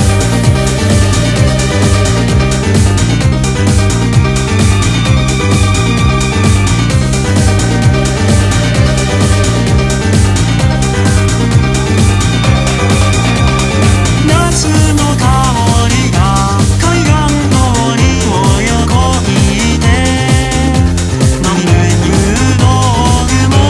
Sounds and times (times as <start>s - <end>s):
Music: 0.0s - 23.6s.